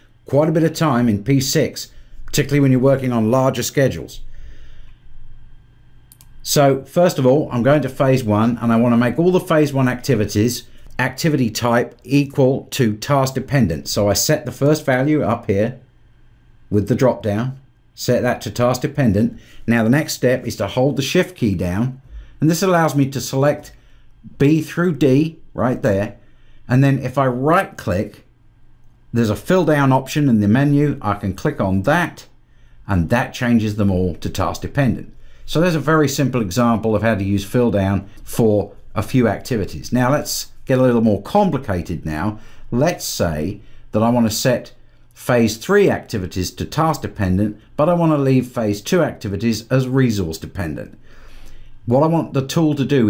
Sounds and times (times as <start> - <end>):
Speech: 0.3 - 4.2, 6.4 - 15.8, 16.7 - 28.3, 29.1 - 51.0, 51.9 - 53.1.